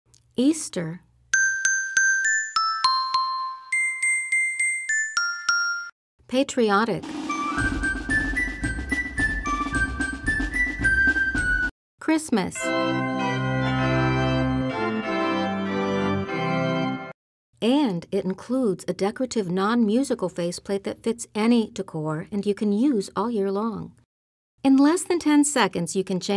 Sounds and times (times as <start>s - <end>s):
Speech: 0.4s - 1.1s, 6.3s - 7.0s, 12.0s - 12.8s, 17.6s - 24.0s, 24.6s - 26.3s
Music: 1.3s - 5.9s, 7.0s - 11.7s, 12.6s - 17.2s.